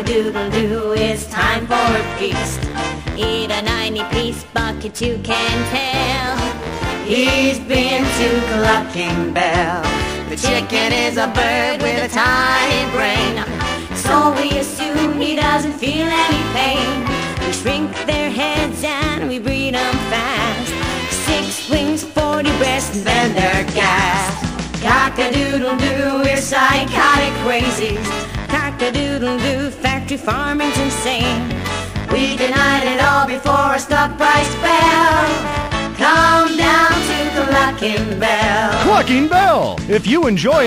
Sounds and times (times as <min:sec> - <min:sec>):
Music: 0:00.0 - 0:40.6.